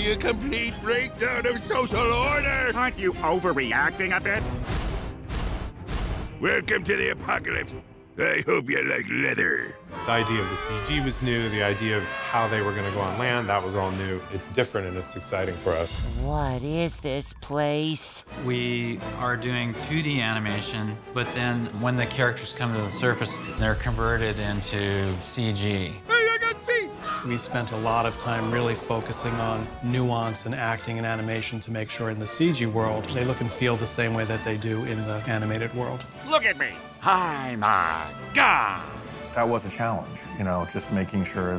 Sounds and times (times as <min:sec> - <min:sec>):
Music: 0:00.0 - 0:41.5
Speech: 0:06.4 - 0:37.7, 0:39.4 - 0:41.5.